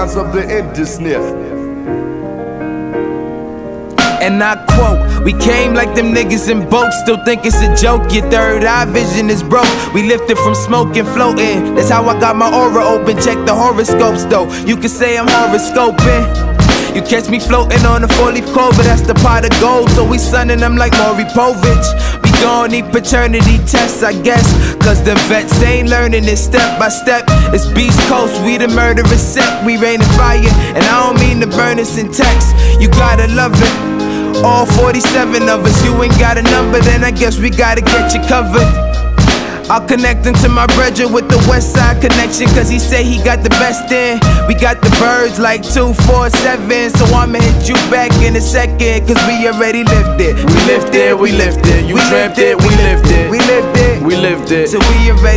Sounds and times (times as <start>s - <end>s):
Music: 0.0s - 55.3s.